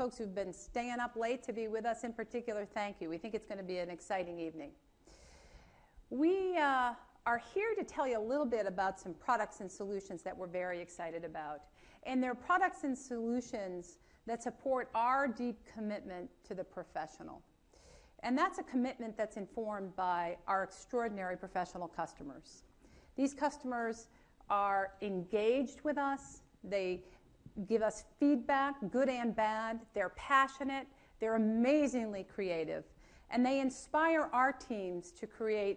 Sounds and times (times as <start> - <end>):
Speech: 0.0 - 4.8, 6.1 - 17.5, 18.2 - 22.6, 23.2 - 27.0, 27.6 - 35.7.